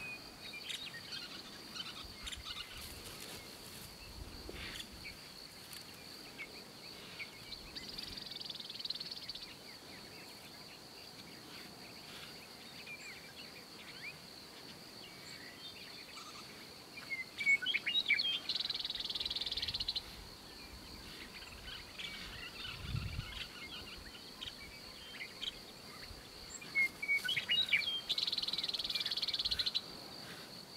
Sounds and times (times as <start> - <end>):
Chirp, tweet: 6.3 - 14.3, 15.0 - 29.8.